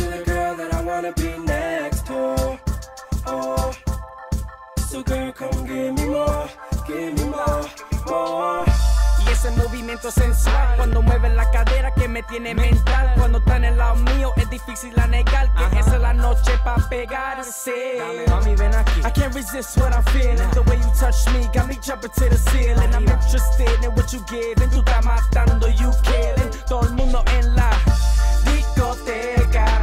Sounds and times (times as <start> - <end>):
Funk: 18.3 - 29.8.